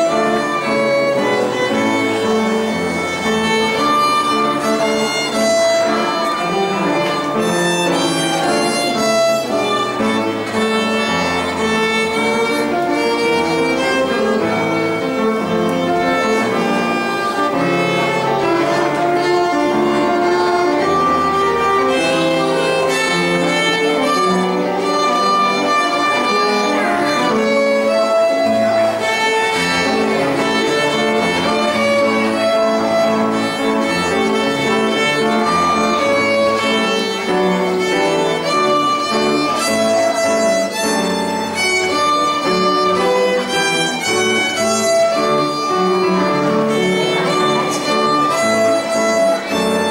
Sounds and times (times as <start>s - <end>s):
Violin, fiddle: 0.0s - 49.9s.